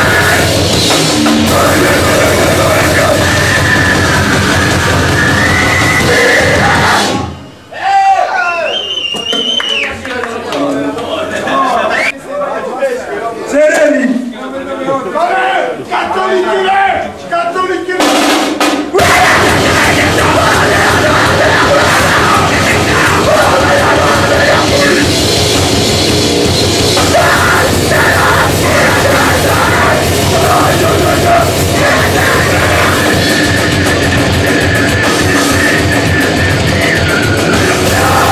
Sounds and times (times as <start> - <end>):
Music: 0.0 - 7.5, 18.0 - 38.3.